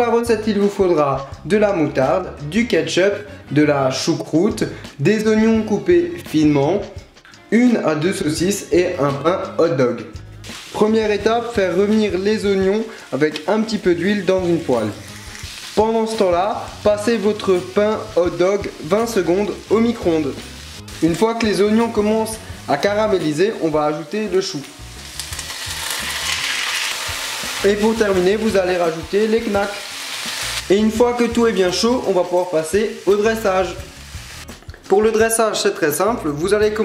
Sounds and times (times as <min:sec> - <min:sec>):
Speech: 0:00.0 - 0:10.2, 0:10.8 - 0:15.0, 0:15.8 - 0:20.4, 0:21.0 - 0:24.7, 0:27.6 - 0:29.8, 0:30.7 - 0:33.9, 0:34.9 - 0:36.8
Music: 0:00.0 - 0:36.8.